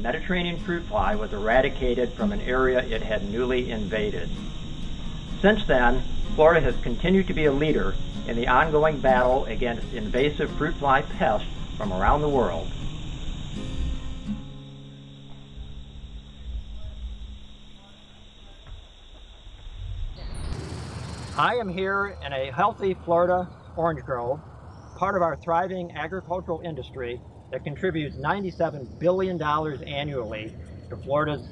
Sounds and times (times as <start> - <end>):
Speech: 0.0 - 4.3, 5.4 - 12.7, 21.4 - 24.4, 25.0 - 31.5.